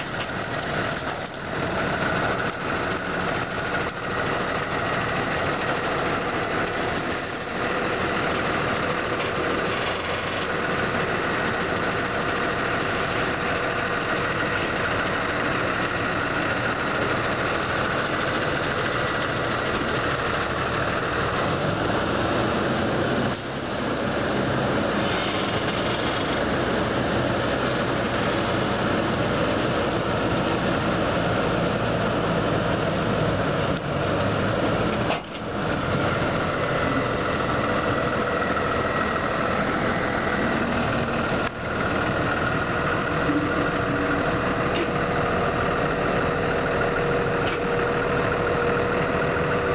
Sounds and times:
Truck: 0.0 - 49.7.

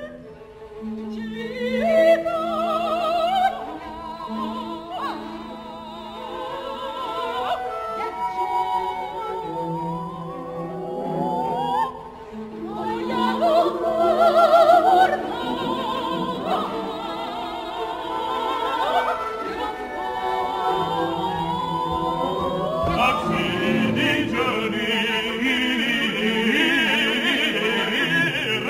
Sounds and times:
Music: 0.0 - 28.6.

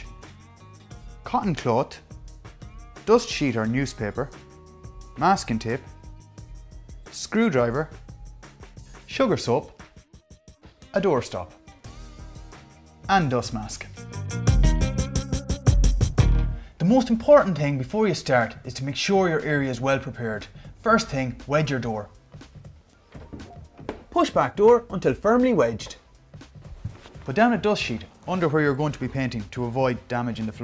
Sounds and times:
Music: 0.0 - 30.6
Speech: 1.3 - 2.1, 3.1 - 4.4, 5.2 - 5.9, 7.1 - 8.0, 9.1 - 9.8, 10.9 - 11.6, 13.1 - 14.0, 16.8 - 22.1, 24.1 - 26.0, 27.3 - 30.6.

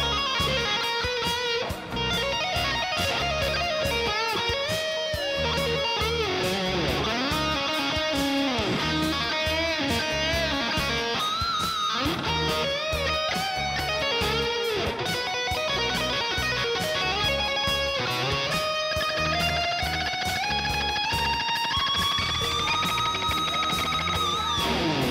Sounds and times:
Electric guitar: 0.0 - 25.1.

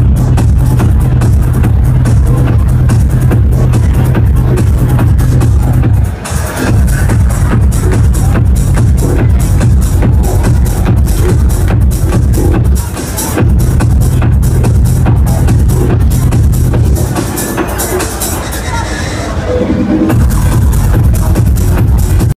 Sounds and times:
Music: 0.0 - 22.3
Speech: 0.2 - 22.3.

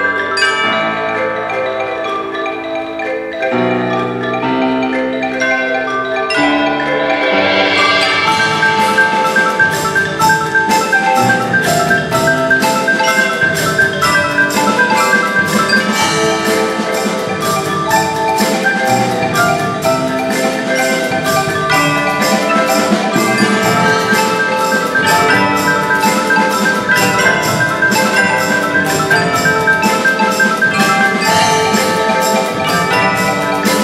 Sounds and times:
Glockenspiel: 0.0 - 33.8
Marimba, xylophone: 0.0 - 33.8.

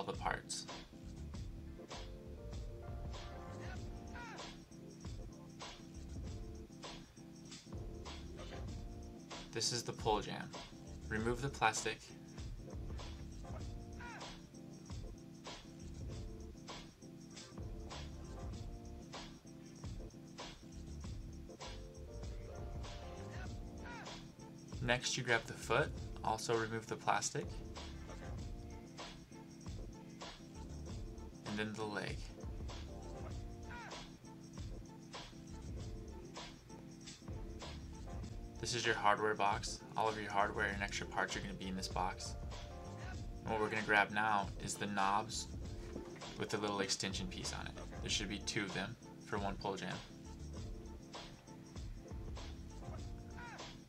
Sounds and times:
Speech: 0.0 - 0.7, 9.6 - 12.1, 24.8 - 27.5, 31.5 - 32.3, 38.6 - 42.3, 43.0 - 45.5, 46.4 - 50.1
Music: 0.0 - 53.8.

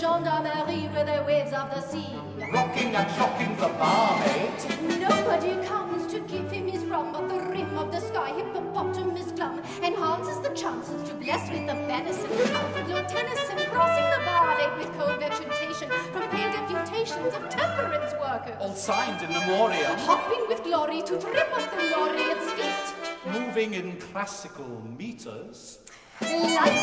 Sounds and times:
Music: 0.0 - 25.3, 25.9 - 26.8
Speech: 17.0 - 26.8.

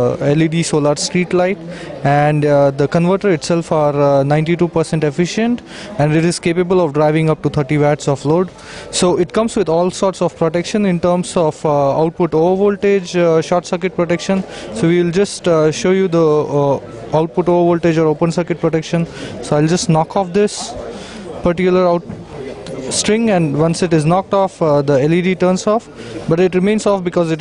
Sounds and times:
Speech: 0.0 - 27.4.

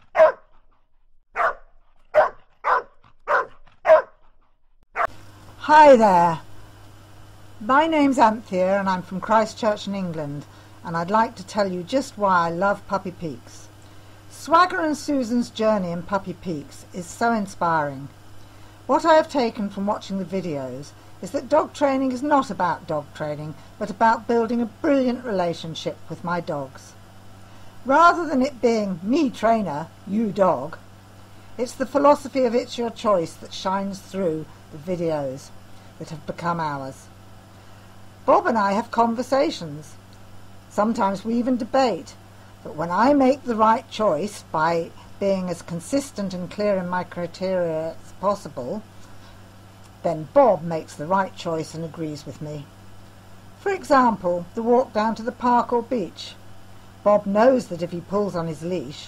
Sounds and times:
Speech: 5.6 - 6.5, 7.6 - 13.7, 14.3 - 18.1, 18.9 - 27.0, 27.9 - 30.8, 31.6 - 37.1, 38.2 - 40.0, 40.7 - 48.8, 50.0 - 52.7, 53.6 - 56.4, 57.0 - 59.0.

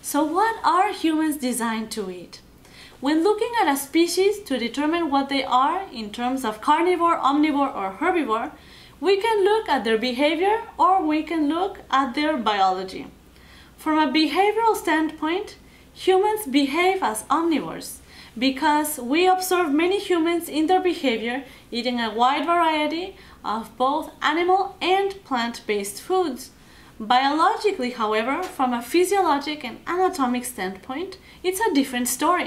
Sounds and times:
Speech: 0.0 - 2.4, 3.0 - 13.2, 13.8 - 32.4.

